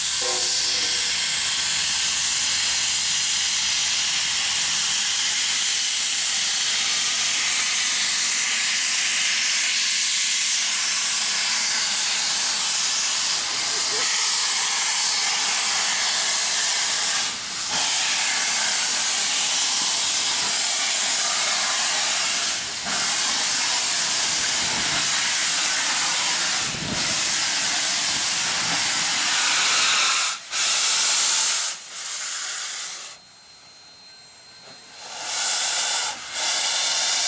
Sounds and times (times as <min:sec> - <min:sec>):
Hiss: 0:00.0 - 0:33.2, 0:34.8 - 0:37.2.